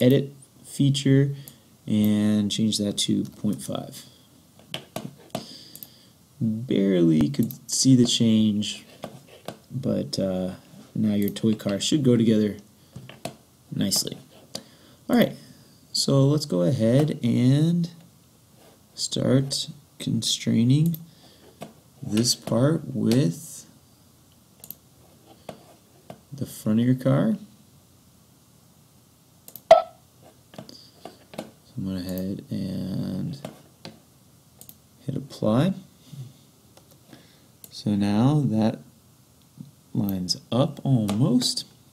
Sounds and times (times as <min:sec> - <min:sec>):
Speech: 0:00.0 - 0:04.1, 0:06.4 - 0:08.9, 0:09.7 - 0:12.7, 0:13.7 - 0:14.3, 0:15.1 - 0:18.0, 0:19.0 - 0:21.0, 0:22.0 - 0:23.8, 0:26.4 - 0:27.5, 0:31.7 - 0:33.5, 0:35.0 - 0:35.9, 0:37.7 - 0:38.9, 0:39.9 - 0:41.7.